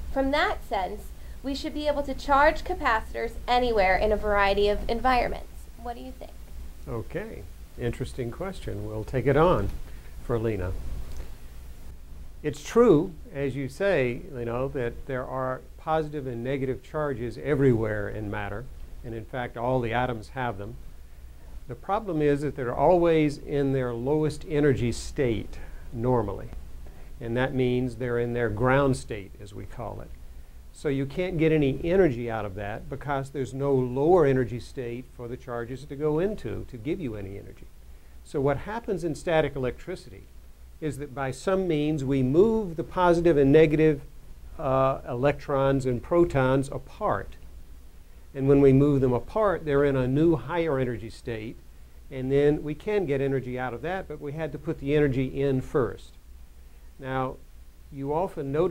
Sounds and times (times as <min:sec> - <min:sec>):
Speech: 0:00.2 - 0:10.8, 0:12.5 - 0:20.8, 0:21.7 - 0:26.6, 0:27.2 - 0:30.1, 0:30.8 - 0:37.7, 0:38.3 - 0:47.4, 0:48.4 - 0:56.2, 0:57.0 - 0:58.7.